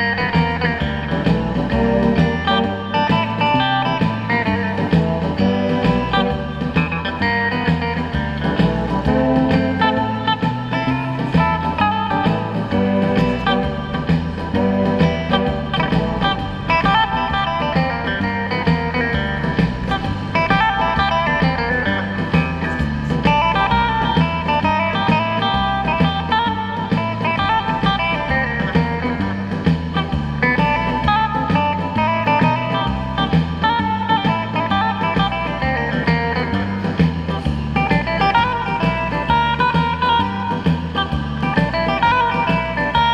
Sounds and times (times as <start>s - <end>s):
Electric guitar: 0.0s - 43.1s
Strum: 0.0s - 43.1s.